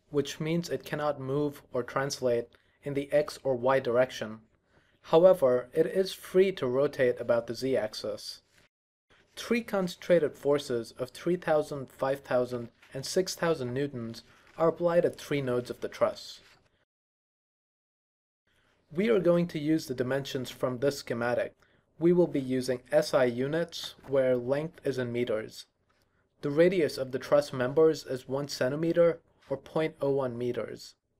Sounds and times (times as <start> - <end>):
Speech: 0.0 - 4.5, 5.1 - 8.5, 9.4 - 16.5, 18.9 - 25.8, 26.4 - 31.0.